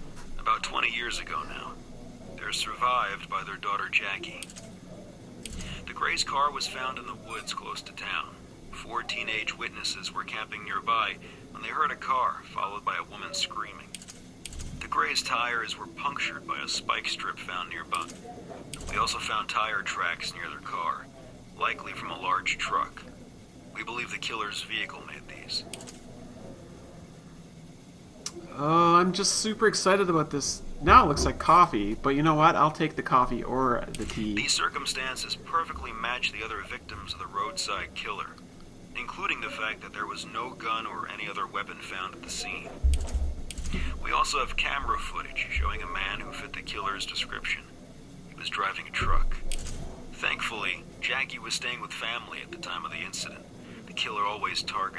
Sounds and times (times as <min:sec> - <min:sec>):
Inside, small room: 0:00.0 - 0:54.9
Speech: 0:00.4 - 0:14.0, 0:14.8 - 0:25.9, 0:28.3 - 0:38.4, 0:39.0 - 0:42.9, 0:43.8 - 0:47.7, 0:48.4 - 0:49.5, 0:50.2 - 0:54.9.